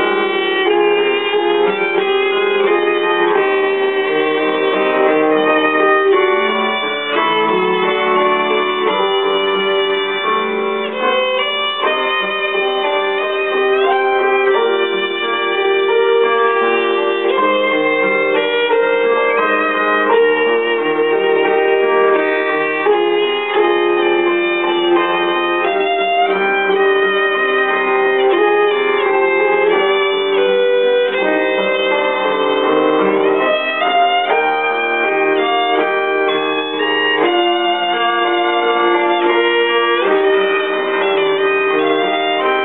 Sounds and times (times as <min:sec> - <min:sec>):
Violin, fiddle: 0:00.0 - 0:42.6.